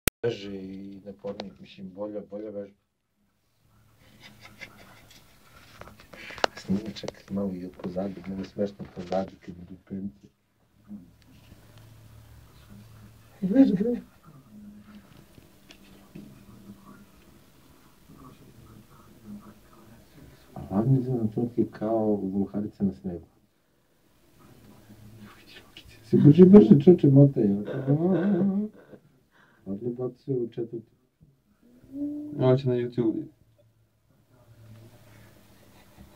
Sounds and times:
Speech: 0.2s - 2.8s, 5.6s - 23.5s, 24.3s - 28.8s, 29.6s - 31.1s, 31.8s - 33.4s
Inside, small room: 0.2s - 36.1s.

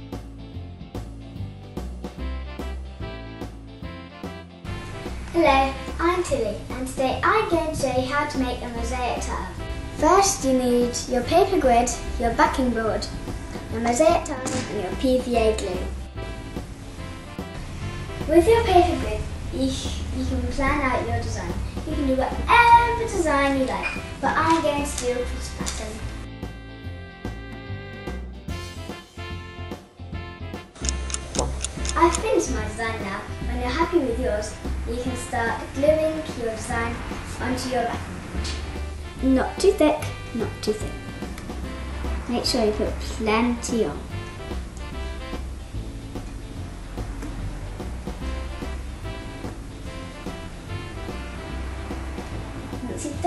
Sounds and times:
Music: 0.0s - 53.2s
Speech: 5.4s - 13.1s, 13.7s - 15.9s, 18.3s - 26.0s, 32.0s - 38.0s, 39.2s - 41.0s, 42.3s - 44.0s, 52.8s - 53.2s.

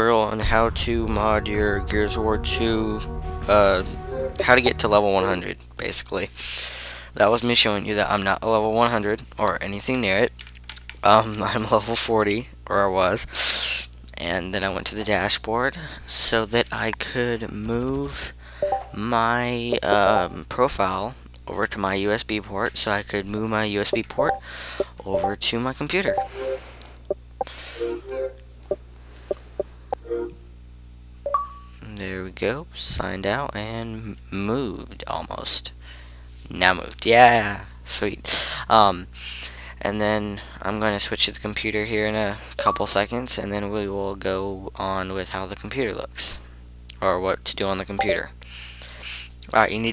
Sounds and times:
Speech: 0.0s - 10.4s, 11.0s - 18.4s, 19.0s - 24.4s, 25.0s - 26.2s, 31.8s - 35.8s, 36.4s - 39.2s, 39.8s - 48.4s, 49.4s - 49.9s.

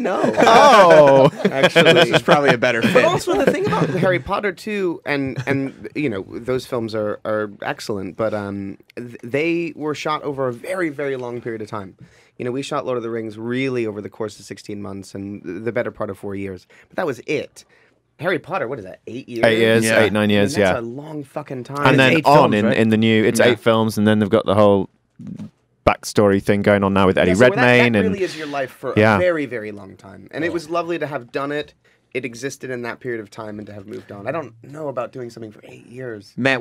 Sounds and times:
Speech: 0.0s - 17.6s, 18.2s - 36.6s.

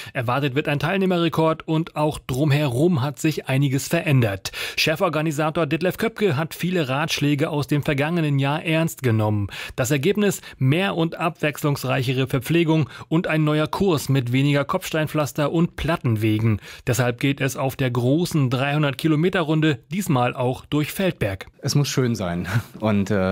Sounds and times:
Speech: 0.1s - 23.3s.

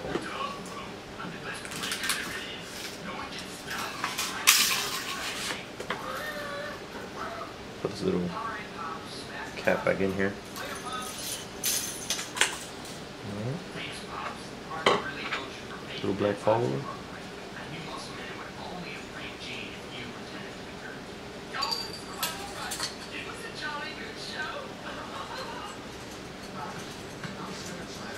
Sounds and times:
Inside, small room: 0.0s - 28.1s.

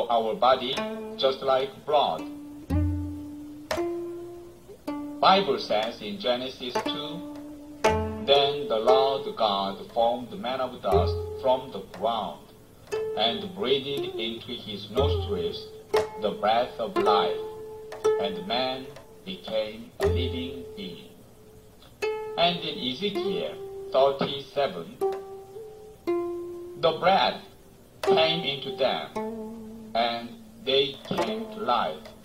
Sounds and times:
Speech: 0.0s - 2.3s, 5.2s - 7.2s, 8.3s - 12.5s, 13.2s - 17.4s, 18.2s - 21.1s, 22.4s - 25.0s, 26.8s - 27.5s, 28.1s - 29.2s, 30.0s - 32.2s
Music: 0.3s - 32.2s.

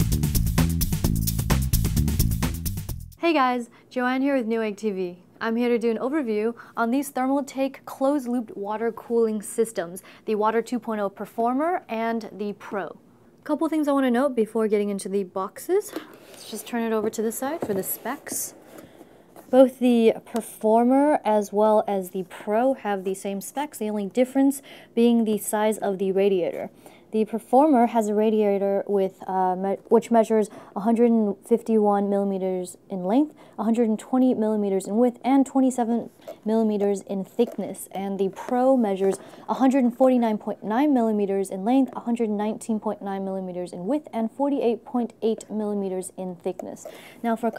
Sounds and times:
Speech: 3.2s - 18.5s, 19.5s - 47.5s.

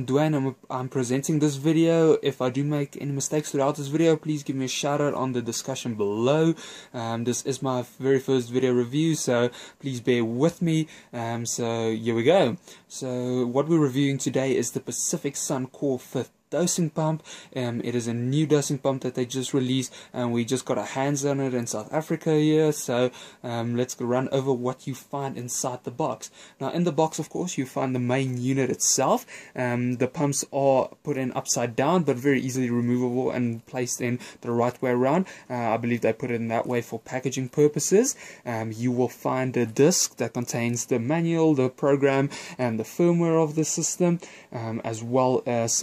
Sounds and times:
Speech: 0.0s - 45.8s.

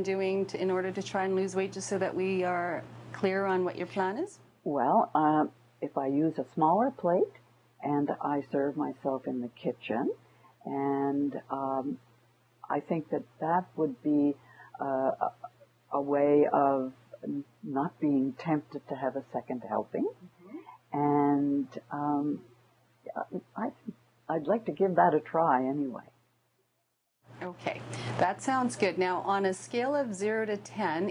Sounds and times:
Conversation: 0.0s - 26.4s, 27.4s - 31.1s.

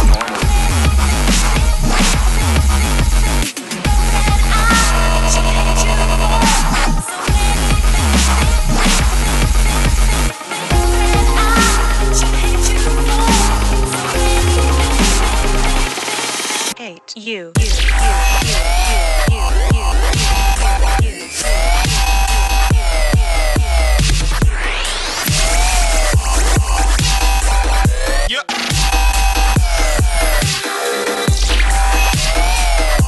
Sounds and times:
Dubstep: 0.0s - 16.8s, 17.6s - 29.2s.

